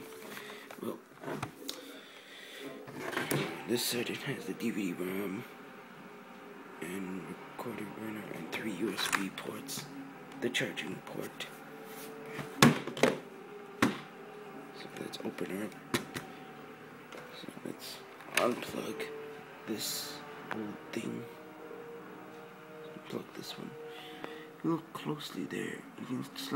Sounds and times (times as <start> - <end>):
Speech: 3.7 - 5.5, 6.8 - 11.6, 14.8 - 15.8, 17.4 - 21.4, 23.0 - 23.8, 24.6 - 26.5.